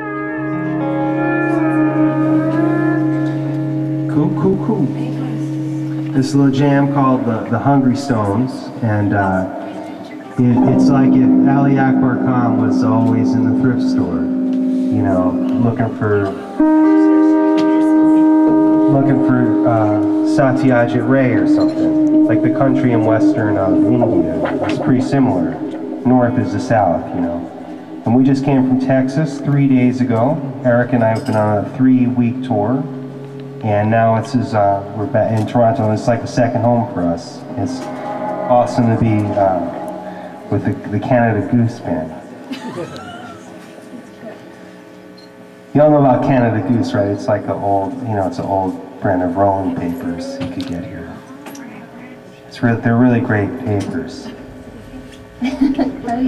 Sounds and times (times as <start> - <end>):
Speech: 4.1 - 5.5, 6.1 - 18.0, 18.8 - 27.5, 28.1 - 32.9, 33.6 - 39.8, 40.5 - 42.2, 45.7 - 54.4, 55.6 - 56.2.